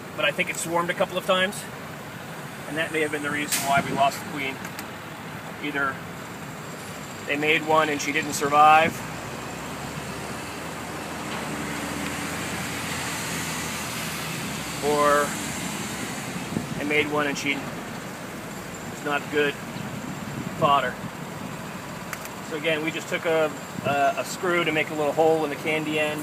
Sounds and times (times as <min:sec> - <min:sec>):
Speech: 0:00.2 - 0:01.8, 0:02.7 - 0:04.6, 0:05.6 - 0:06.0, 0:07.3 - 0:09.0, 0:14.8 - 0:15.3, 0:16.8 - 0:17.7, 0:19.0 - 0:19.6, 0:20.6 - 0:21.0, 0:22.5 - 0:26.2.